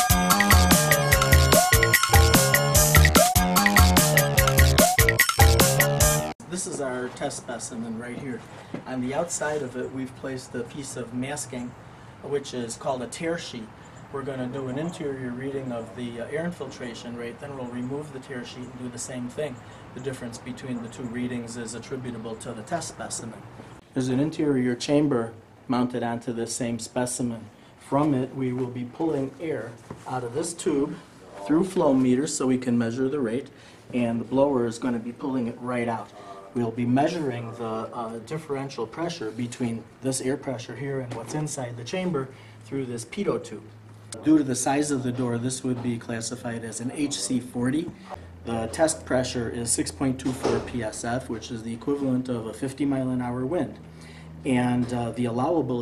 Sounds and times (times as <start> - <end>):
Music: 0.0 - 6.4
Speech: 6.4 - 53.8, 54.4 - 55.8.